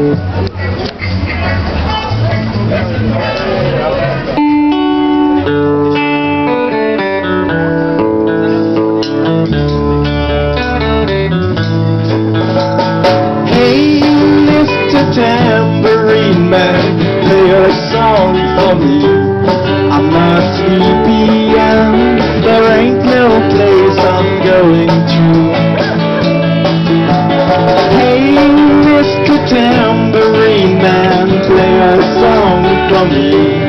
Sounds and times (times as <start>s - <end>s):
Musical instrument: 0.0s - 33.6s.